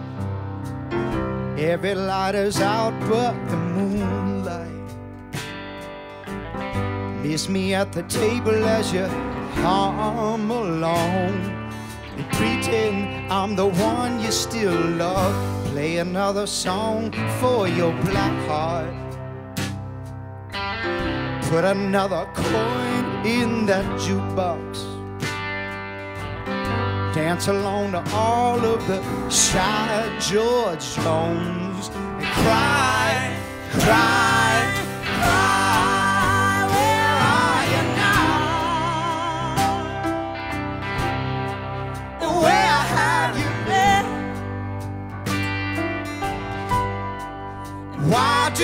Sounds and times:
Music: 0.0 - 48.6.

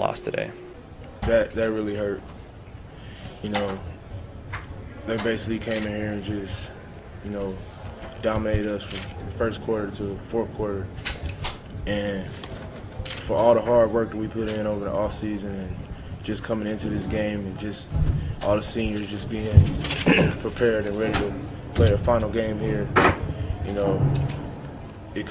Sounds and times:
Speech: 0.0 - 0.6, 1.2 - 2.2, 3.4 - 3.9, 5.1 - 6.7, 7.3 - 10.9, 11.9 - 12.4, 13.2 - 23.0, 23.7 - 24.1.

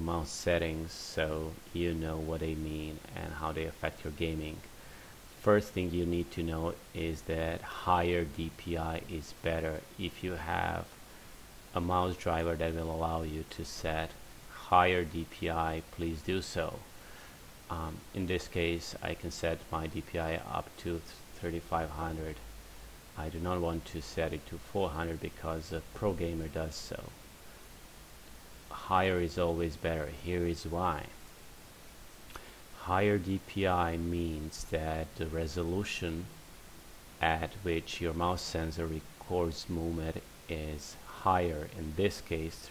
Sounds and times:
Speech: 0.0 - 4.7, 5.4 - 11.0, 11.7 - 16.9, 17.7 - 22.5, 23.2 - 27.2, 28.7 - 31.2, 32.8 - 36.4, 37.2 - 42.7.

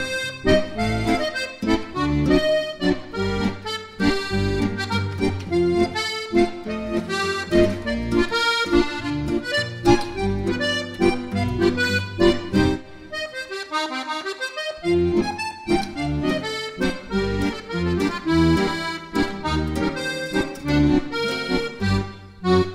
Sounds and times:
Funny music: 0.0 - 22.7.

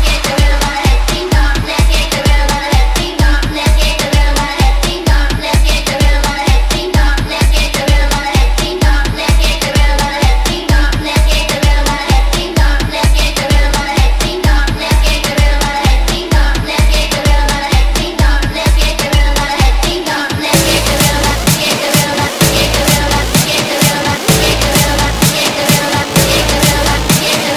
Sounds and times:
Dance music: 0.0 - 27.5.

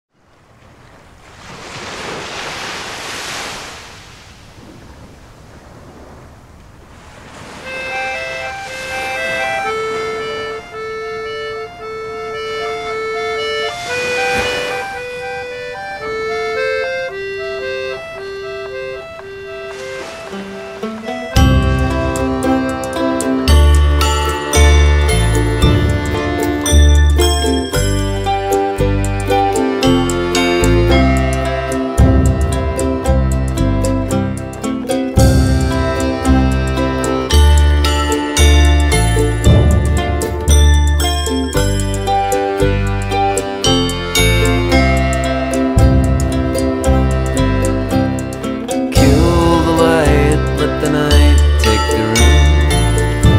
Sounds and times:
Outside, rural or natural: 0.0 - 53.3
Ocean: 0.1 - 53.3
Music: 7.7 - 53.3.

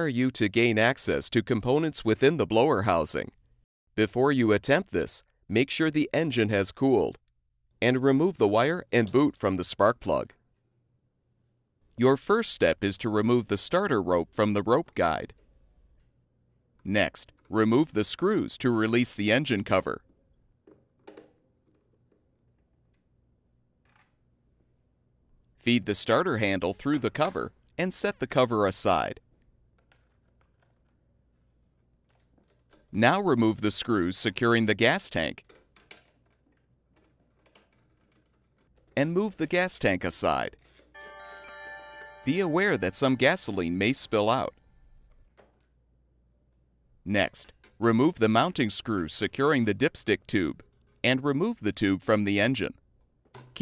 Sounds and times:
Speech: 0.0 - 3.4, 4.0 - 7.2, 7.8 - 10.4, 12.0 - 15.4, 16.9 - 20.0, 25.6 - 29.2, 33.0 - 35.4, 39.0 - 40.6, 42.3 - 44.5, 47.1 - 52.8.

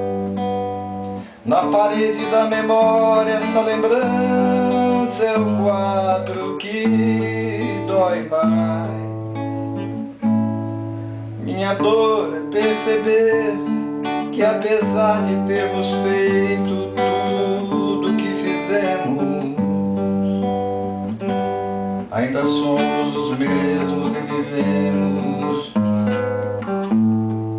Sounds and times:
Acoustic guitar: 0.0 - 27.5
Singing: 1.5 - 9.1, 11.4 - 13.7, 14.3 - 19.7, 22.1 - 25.9.

